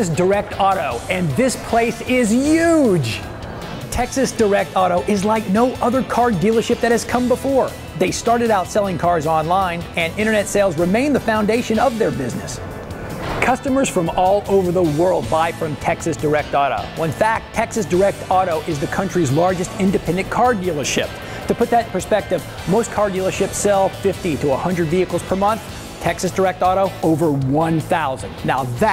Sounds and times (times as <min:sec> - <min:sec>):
Speech: 0:00.0 - 0:03.2, 0:03.9 - 0:12.6, 0:13.4 - 0:28.9
Music: 0:00.0 - 0:28.9.